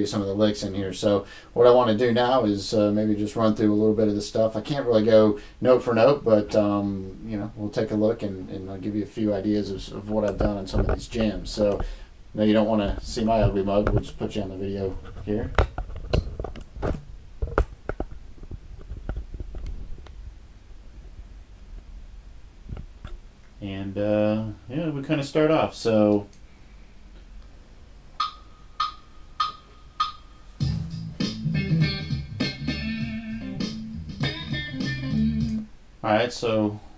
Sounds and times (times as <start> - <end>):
Speech: 0.0 - 15.6, 23.6 - 26.3, 36.0 - 36.8.